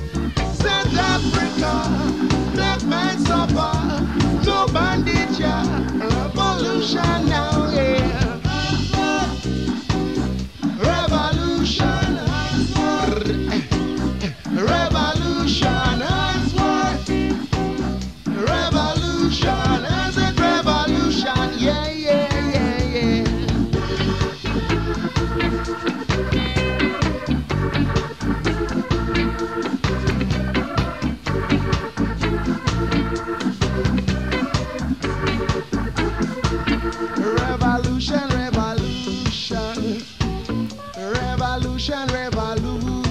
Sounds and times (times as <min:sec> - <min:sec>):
Guitar: 0:00.0 - 0:43.1.